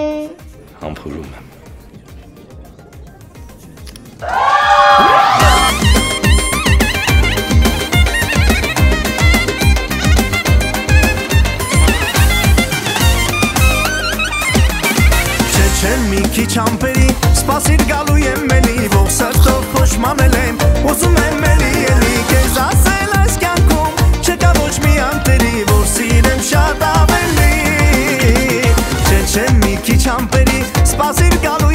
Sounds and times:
Music: 0.0s - 31.7s.

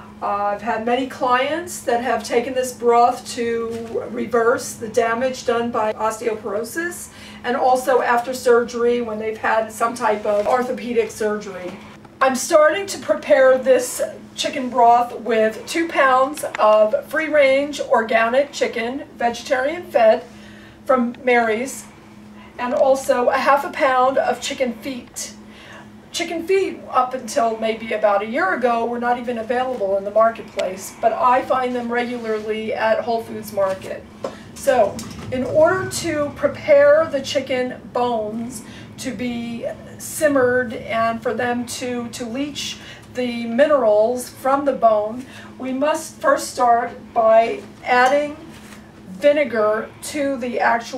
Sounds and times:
Speech: 0.2s - 20.3s, 20.9s - 21.9s, 22.6s - 25.4s, 26.1s - 48.5s, 49.1s - 50.9s.

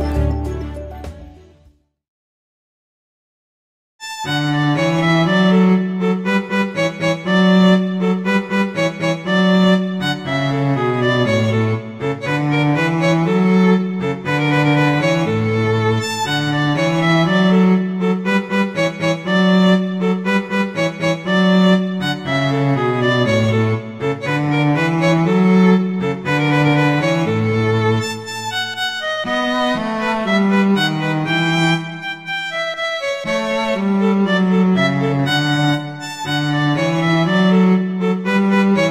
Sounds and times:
Violin, fiddle: 4.0s - 38.9s.

